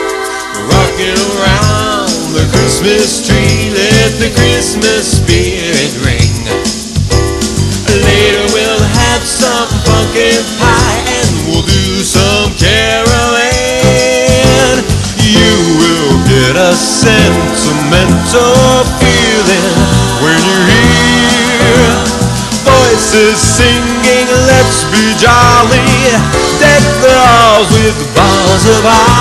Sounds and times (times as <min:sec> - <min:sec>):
Christmas music: 0:00.0 - 0:29.2.